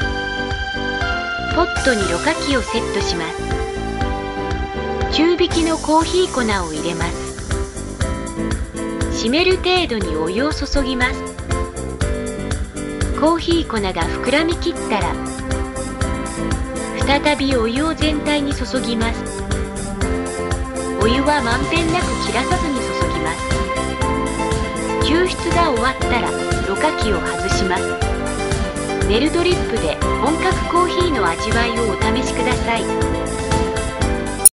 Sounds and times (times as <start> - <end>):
Music: 0.0 - 34.5
Speech: 1.5 - 3.4, 5.1 - 7.2, 9.2 - 11.2, 13.2 - 15.2, 17.0 - 19.2, 21.0 - 23.5, 25.0 - 28.0, 29.1 - 32.9.